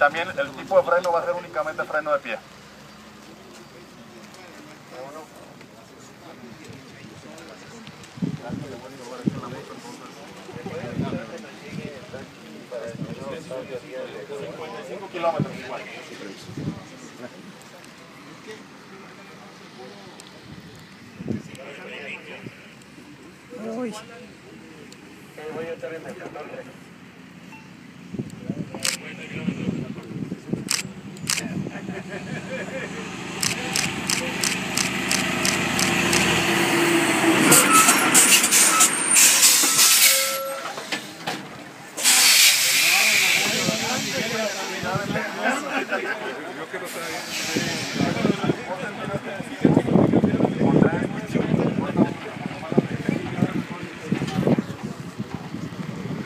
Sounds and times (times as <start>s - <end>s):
Vehicle: 0.0s - 56.2s
Speech: 3.2s - 26.9s, 41.8s - 55.6s.